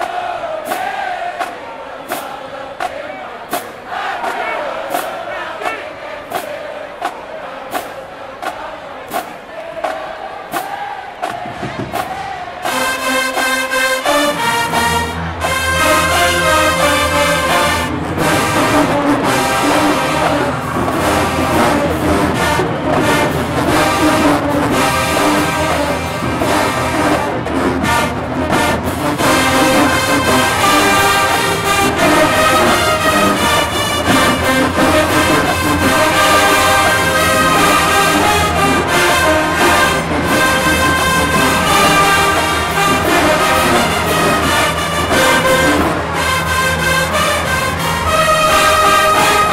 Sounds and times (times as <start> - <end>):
Music: 0.0 - 49.5.